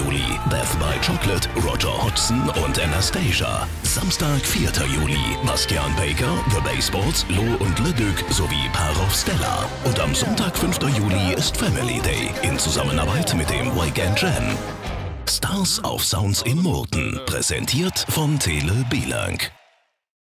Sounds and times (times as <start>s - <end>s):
Speech: 0.0s - 14.6s, 15.3s - 19.6s
Music: 0.0s - 19.6s.